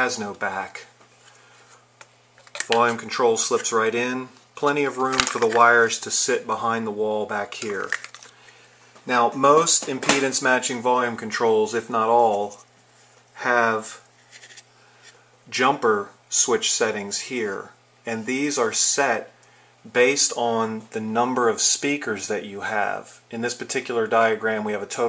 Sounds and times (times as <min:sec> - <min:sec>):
Speech: 0:00.0 - 0:01.0, 0:02.6 - 0:08.0, 0:09.0 - 0:12.7, 0:13.4 - 0:14.1, 0:15.5 - 0:25.0.